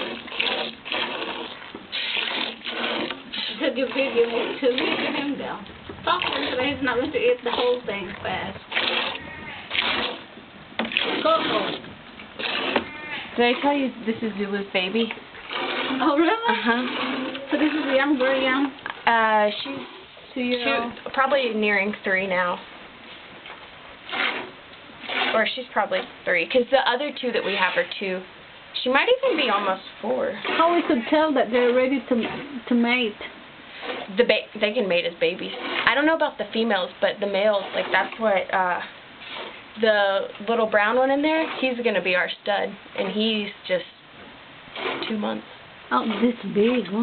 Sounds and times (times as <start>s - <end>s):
Speech: 3.4s - 8.6s, 11.2s - 11.8s, 13.4s - 15.2s, 16.0s - 22.6s, 25.3s - 33.3s, 34.1s - 38.9s, 39.8s - 44.0s, 45.0s - 47.0s
Bleat: 9.1s - 9.7s, 12.8s - 13.3s.